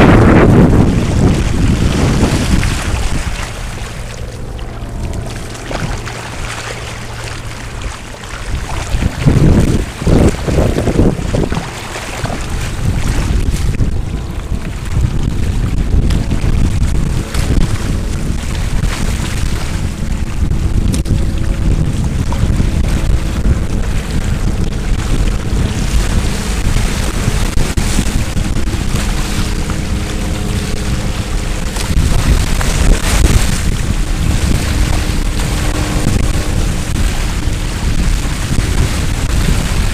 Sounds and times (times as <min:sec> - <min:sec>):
Sailboat, sailing ship: 0:00.0 - 0:39.9
Wind noise (microphone): 0:00.0 - 0:39.9.